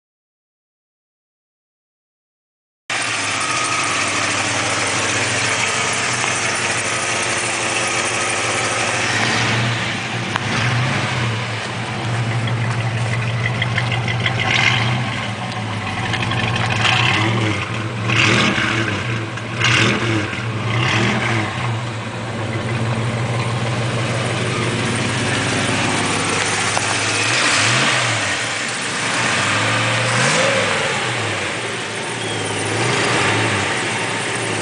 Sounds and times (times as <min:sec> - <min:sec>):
Car: 0:02.9 - 0:34.6
Idling: 0:02.9 - 0:34.6.